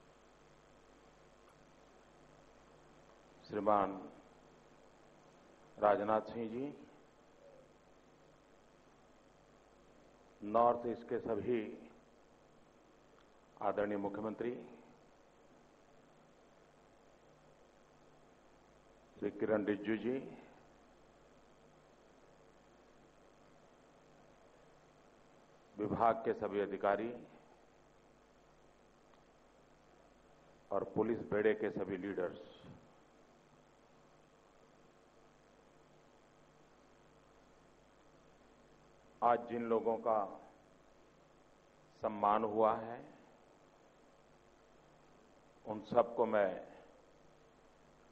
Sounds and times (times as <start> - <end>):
Narration, monologue: 0.0 - 48.1
Male speech, man speaking: 3.4 - 4.1, 5.8 - 6.9, 10.4 - 11.9, 13.6 - 14.8, 19.2 - 20.5, 25.8 - 27.4, 30.7 - 32.7, 39.2 - 40.5, 42.0 - 43.2, 45.7 - 46.9.